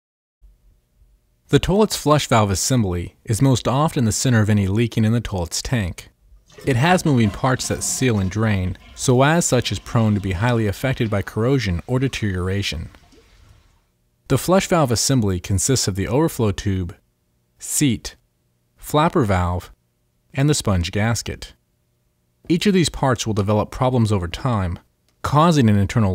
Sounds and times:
Speech: 1.5s - 13.0s, 14.3s - 17.0s, 17.6s - 18.2s, 18.8s - 21.6s, 22.5s - 26.1s.

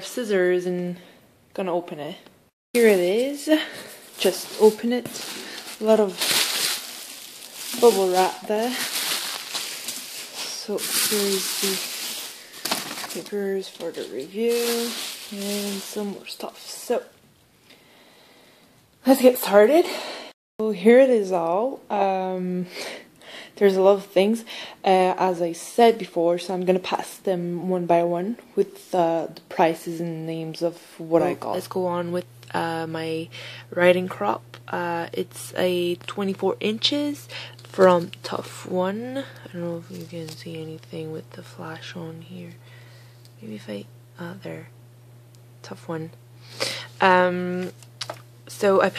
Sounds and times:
Speech: 0.0s - 5.2s, 5.8s - 6.2s, 7.7s - 8.9s, 10.4s - 11.9s, 13.1s - 17.2s, 19.0s - 22.7s, 23.6s - 42.6s, 43.4s - 44.7s, 45.6s - 46.2s, 47.0s - 47.8s, 48.5s - 48.9s.

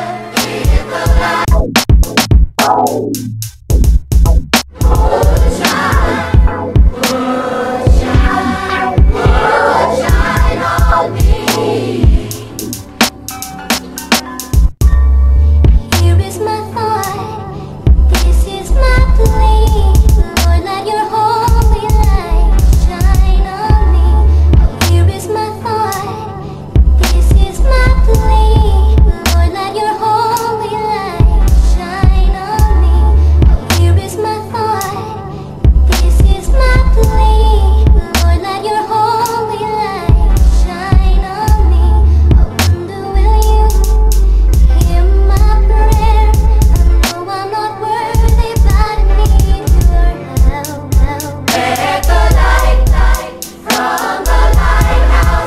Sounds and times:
Gospel music: 0.0s - 1.5s, 4.8s - 14.4s, 51.4s - 55.4s.

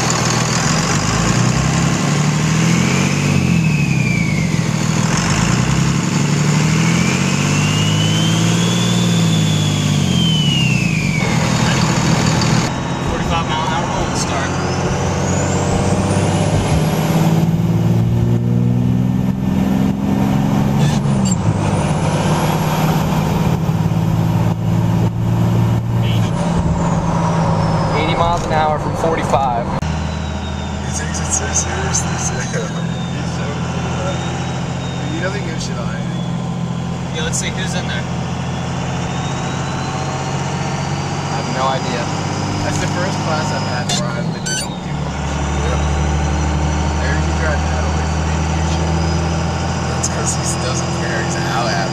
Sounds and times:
Medium engine (mid frequency): 0.0s - 51.9s.

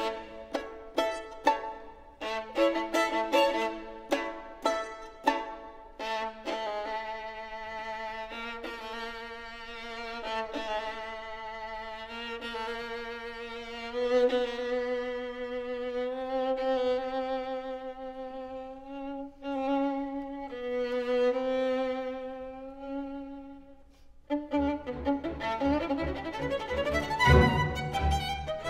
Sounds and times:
Violin, fiddle: 0.0s - 28.6s.

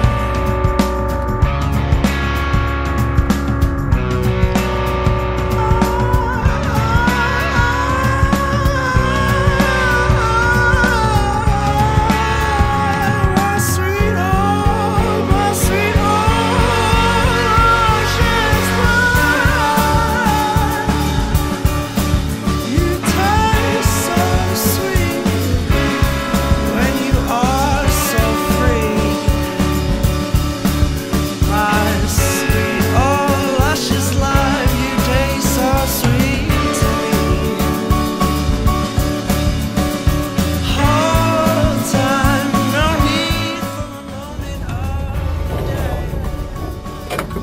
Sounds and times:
Psychedelic rock: 0.0s - 47.4s.

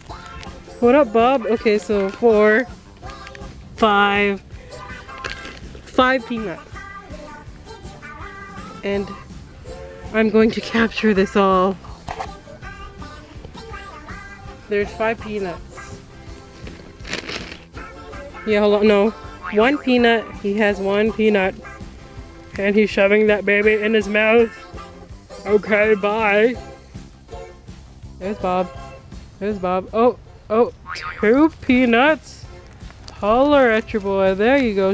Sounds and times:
Music: 0.0s - 34.9s.

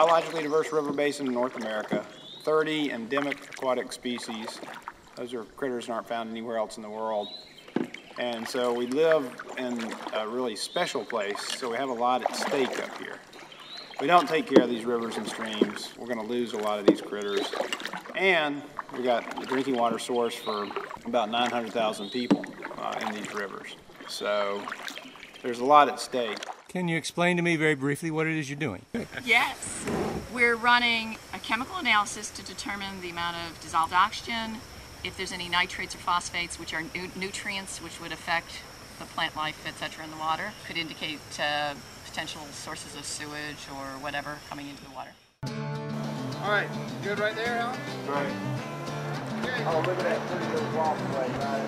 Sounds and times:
Rowboat, canoe, kayak: 0.0s - 27.0s, 28.9s - 45.2s, 49.2s - 51.6s
Speech: 14.0s - 17.6s, 18.2s - 24.7s, 25.5s - 29.6s, 49.4s - 51.6s.

